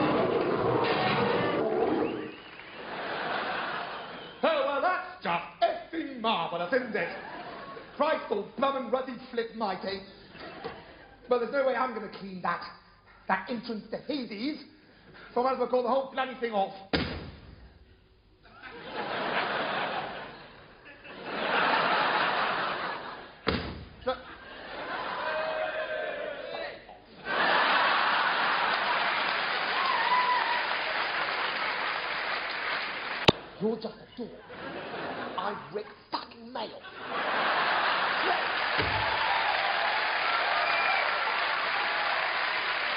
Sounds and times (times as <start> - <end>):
Speech: 4.4 - 7.3, 8.0 - 10.2, 11.3 - 16.9, 33.6 - 34.4, 35.4 - 36.9.